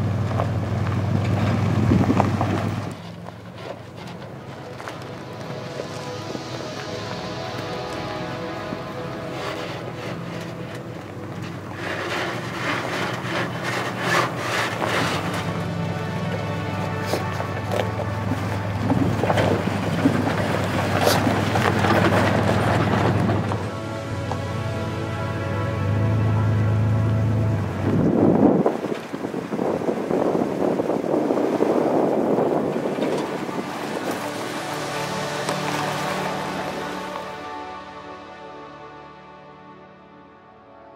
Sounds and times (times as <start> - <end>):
Car: 0.0 - 40.9
Music: 3.7 - 28.6, 32.2 - 40.9.